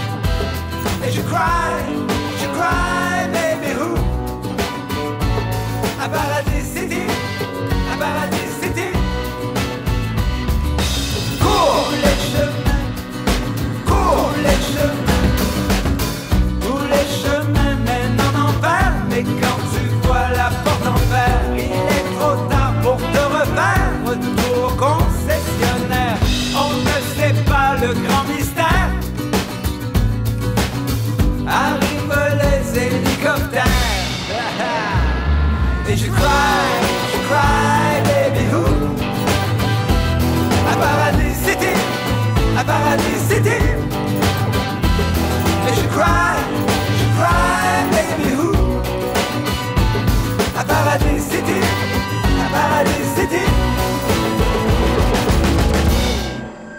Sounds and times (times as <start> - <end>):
Music: 0.0 - 56.7.